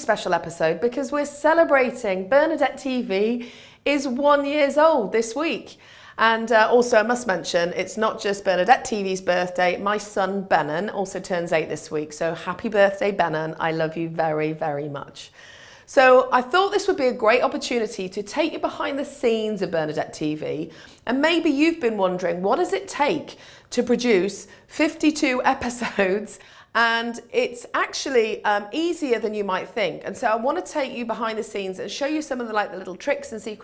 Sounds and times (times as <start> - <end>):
Speech: 0.0 - 15.3, 15.9 - 33.6.